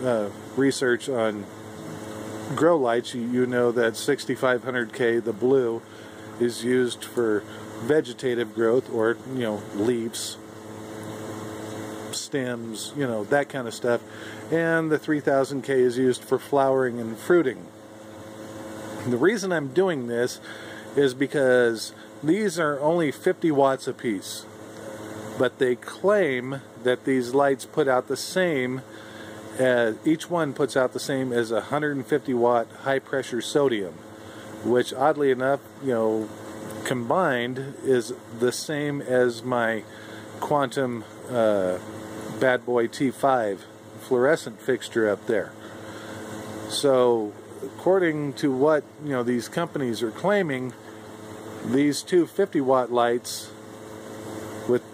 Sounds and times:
Speech: 0.0s - 10.4s, 12.1s - 17.7s, 19.0s - 24.5s, 25.4s - 28.9s, 29.5s - 34.0s, 34.6s - 45.6s, 46.7s - 50.8s, 51.6s - 53.6s, 54.7s - 54.9s
Mechanical fan: 0.0s - 54.9s.

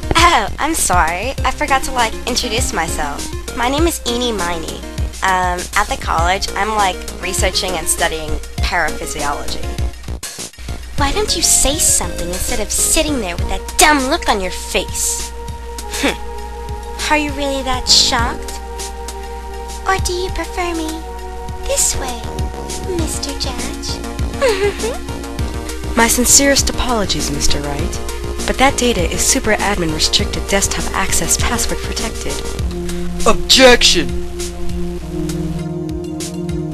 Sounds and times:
Music: 0.0s - 36.7s
Speech: 0.1s - 9.8s, 11.0s - 15.3s, 15.9s - 16.2s, 17.0s - 18.6s, 19.9s - 21.0s, 21.6s - 25.0s, 26.0s - 32.5s, 33.2s - 34.1s.

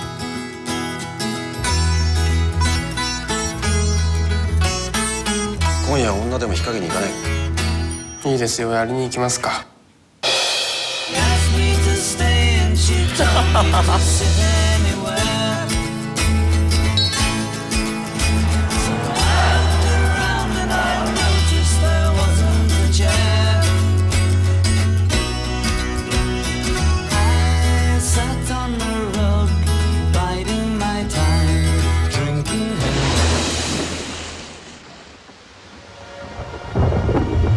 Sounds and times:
Music: 0.0s - 8.6s, 10.2s - 33.6s.

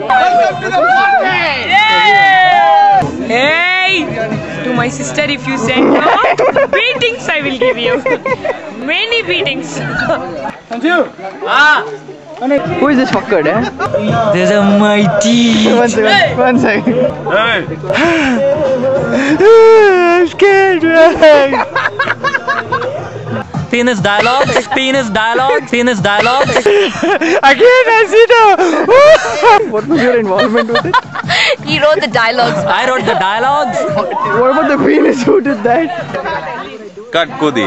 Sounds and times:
Music: 0.0s - 10.7s, 11.9s - 37.6s
Conversation: 0.0s - 37.6s
Female speech, woman speaking: 4.7s - 8.0s, 8.8s - 10.5s, 31.7s - 33.8s
Male speech, man speaking: 9.8s - 18.0s, 18.6s - 26.7s, 27.4s - 30.9s, 32.4s - 37.6s.

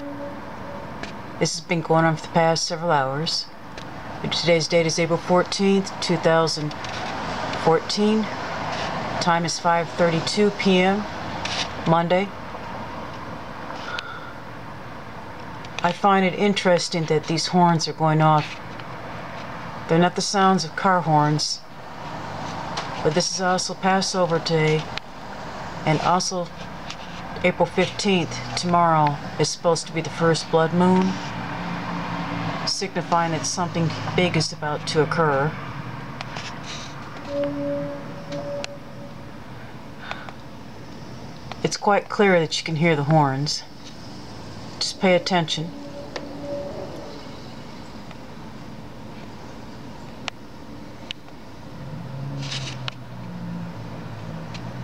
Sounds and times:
Speech: 1.4s - 3.5s, 4.2s - 6.8s, 7.6s - 8.4s, 9.2s - 11.1s, 11.8s - 12.4s, 15.8s - 18.6s, 19.9s - 21.7s, 23.0s - 24.9s, 25.8s - 26.5s, 27.4s - 31.2s, 32.7s - 35.6s, 41.6s - 43.7s, 44.8s - 45.7s.

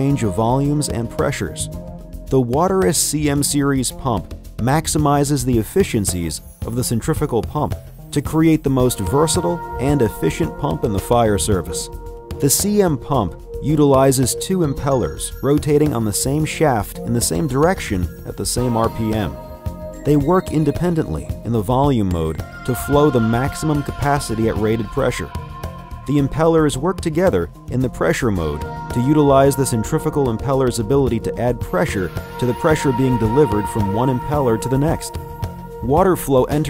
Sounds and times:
Speech: 0.0s - 1.7s, 2.3s - 19.4s, 20.0s - 25.5s, 26.1s - 35.2s, 35.8s - 36.7s
Music: 0.0s - 36.7s.

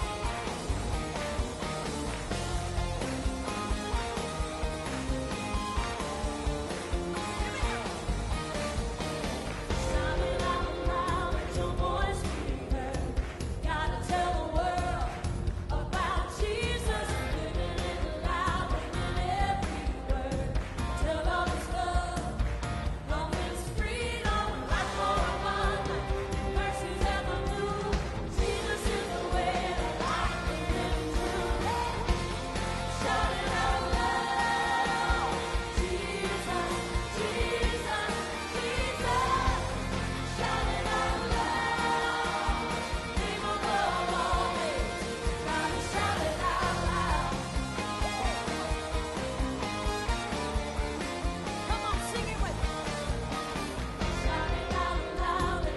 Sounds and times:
Music: 0.0s - 55.7s.

